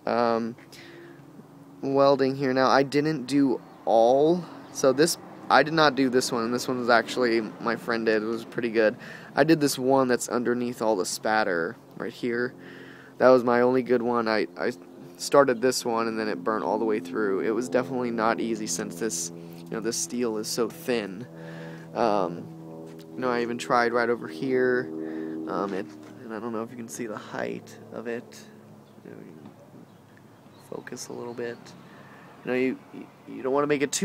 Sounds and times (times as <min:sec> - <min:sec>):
Speech: 0:00.0 - 0:00.6, 0:01.8 - 0:12.6, 0:13.2 - 0:21.3, 0:22.0 - 0:22.5, 0:23.2 - 0:24.9, 0:25.5 - 0:28.5, 0:29.1 - 0:29.5, 0:30.7 - 0:31.8, 0:32.5 - 0:34.0
Outside, urban or manmade: 0:00.0 - 0:34.0
Vehicle: 0:00.0 - 0:34.0.